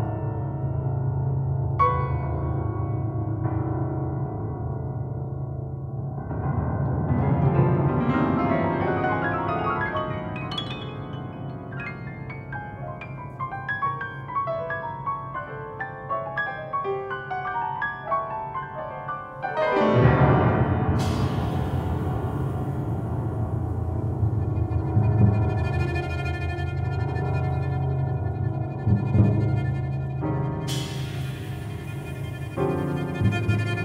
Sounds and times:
Background music: 19.2s - 33.8s.

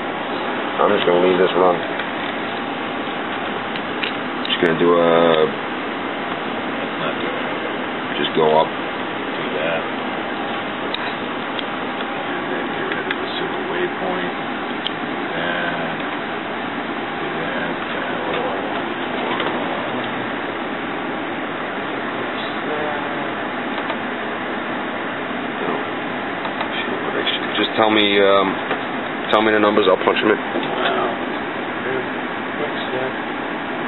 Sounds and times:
Speech: 0.8s - 1.9s, 4.5s - 5.6s, 6.9s - 8.7s, 9.4s - 9.9s, 12.2s - 14.4s, 15.3s - 16.0s, 17.2s - 18.7s, 22.3s - 23.4s, 26.6s - 28.6s, 29.3s - 33.2s.

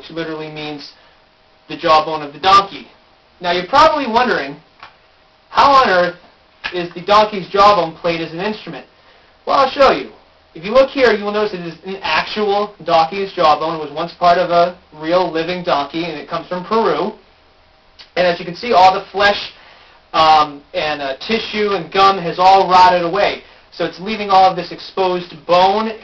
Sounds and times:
Speech: 0.0s - 1.0s, 1.7s - 4.6s, 5.5s - 8.9s, 9.5s - 17.2s, 18.0s - 26.0s.

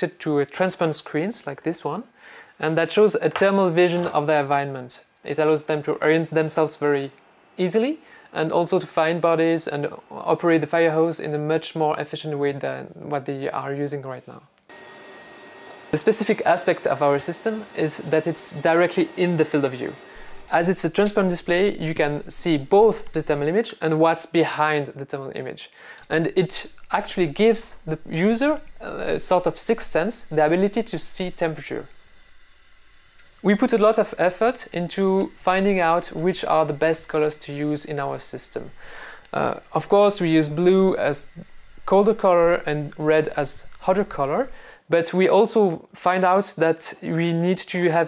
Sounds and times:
Speech: 0.0s - 14.5s, 16.0s - 31.9s, 33.4s - 48.0s.

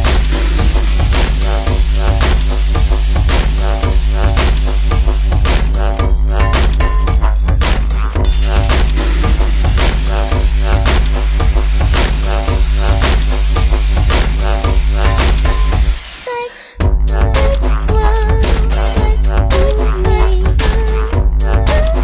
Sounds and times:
Music: 0.0s - 16.1s, 16.7s - 22.0s.

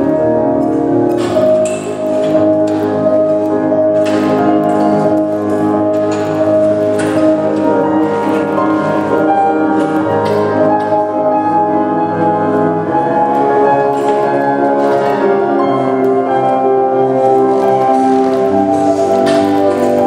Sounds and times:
New-age music: 0.0s - 20.0s.

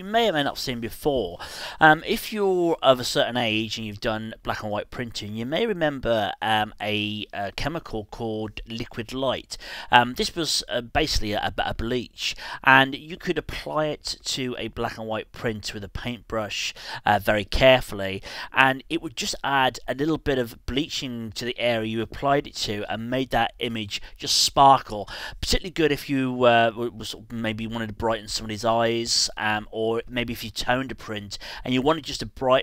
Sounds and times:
Speech: 0.0s - 32.6s.

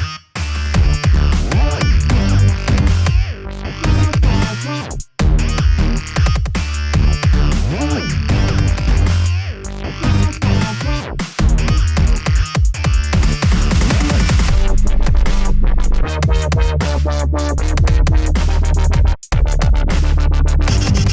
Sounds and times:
Dubstep: 0.0s - 21.1s.

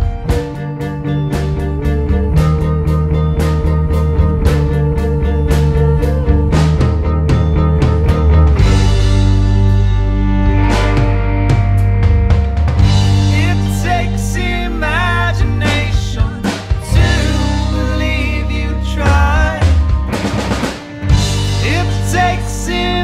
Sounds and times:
Bass drum: 0.0s - 23.0s
Drum kit: 0.0s - 23.0s.

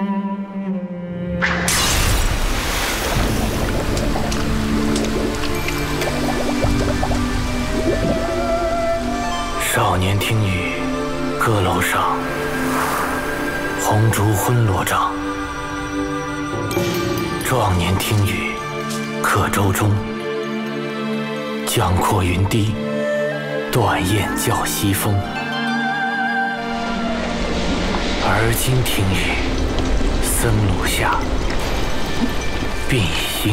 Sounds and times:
Music: 0.0s - 33.5s
Speech: 9.6s - 10.8s, 11.4s - 12.2s, 13.8s - 15.2s, 17.4s - 18.6s, 19.2s - 20.1s, 21.7s - 22.8s, 23.7s - 25.3s, 28.2s - 29.5s, 30.2s - 31.3s, 32.9s - 33.5s.

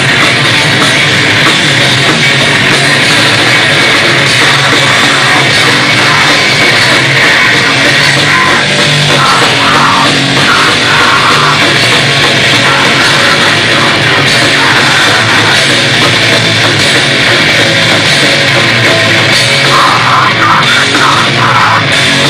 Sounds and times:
Drum: 0.0s - 22.3s
Heavy metal: 0.0s - 22.3s.

